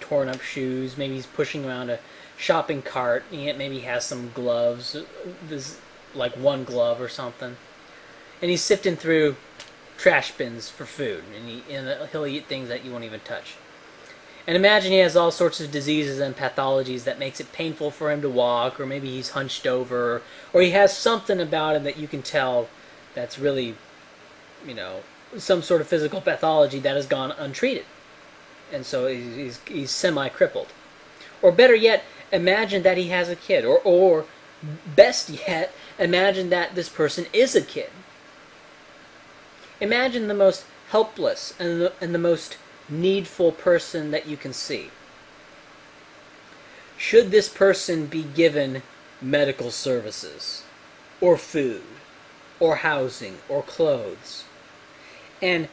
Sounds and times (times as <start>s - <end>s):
Male speech, man speaking: 0.0s - 7.6s, 8.4s - 9.4s, 10.0s - 13.6s, 14.4s - 23.8s, 24.6s - 27.9s, 28.7s - 30.7s, 31.4s - 38.0s, 39.8s - 44.9s, 47.0s - 52.0s, 52.6s - 54.5s, 55.4s - 55.7s.